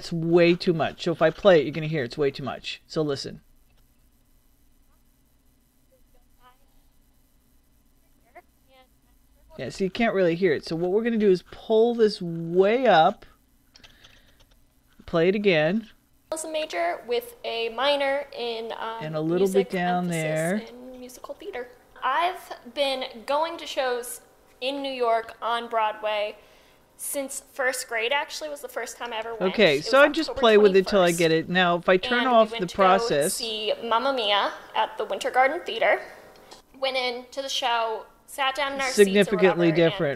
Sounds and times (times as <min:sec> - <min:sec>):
Female speech, woman speaking: 0:06.0 - 0:06.8, 0:16.4 - 0:26.4, 0:27.0 - 0:31.3, 0:32.0 - 0:36.2, 0:36.8 - 0:40.1.